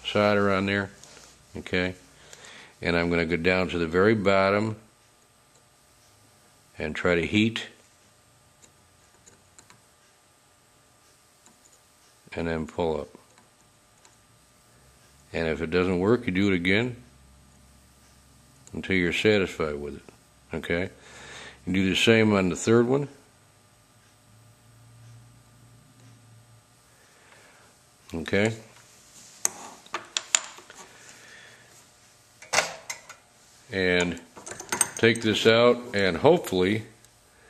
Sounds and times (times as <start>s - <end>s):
Speech: 0.0s - 2.0s, 2.8s - 4.9s, 6.8s - 7.8s, 12.3s - 13.2s, 15.3s - 17.1s, 18.7s - 21.0s, 21.7s - 23.2s, 28.1s - 28.7s, 33.7s - 34.3s, 35.0s - 37.0s.